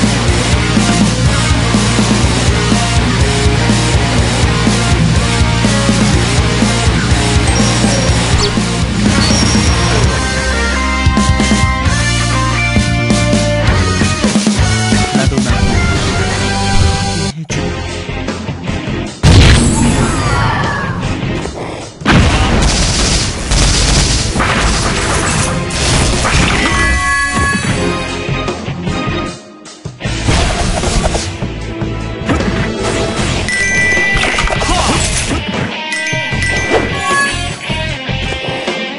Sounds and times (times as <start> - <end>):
Music: 0.0 - 38.9.